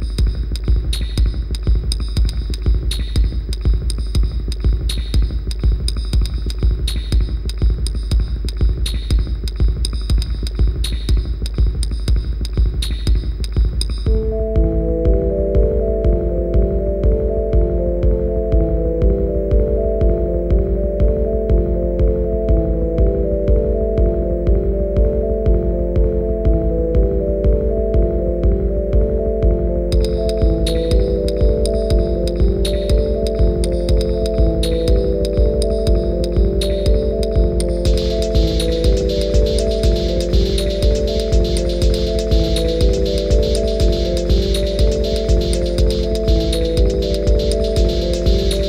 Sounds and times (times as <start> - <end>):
Music: 0.0 - 48.6.